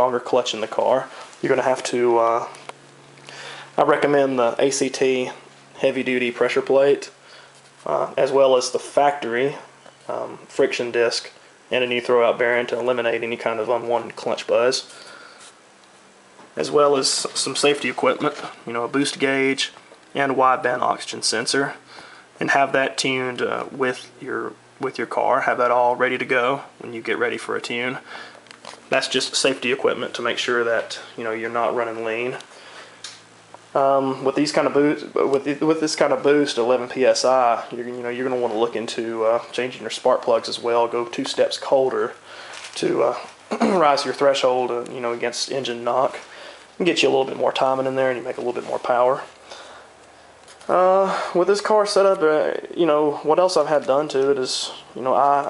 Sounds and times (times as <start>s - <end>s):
Speech: 0.0s - 2.7s, 3.8s - 7.2s, 7.8s - 15.1s, 16.6s - 28.1s, 28.9s - 32.5s, 33.7s - 49.4s, 50.6s - 55.4s.